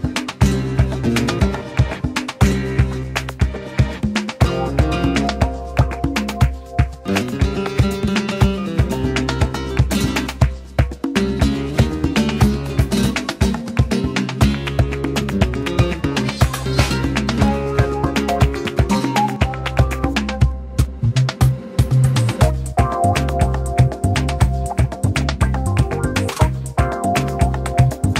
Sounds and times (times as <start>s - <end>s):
Music: 0.0s - 28.1s.